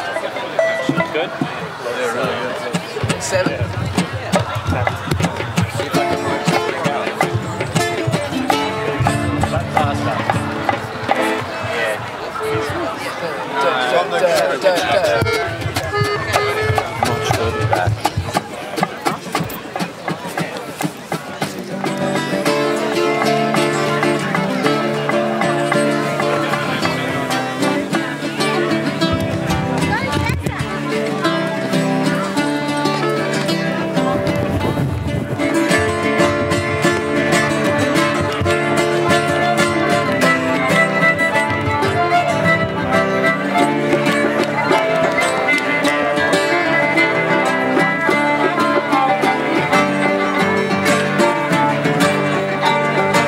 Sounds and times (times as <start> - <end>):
Speech: 0.0 - 53.2
Pizzicato: 14.0 - 53.2.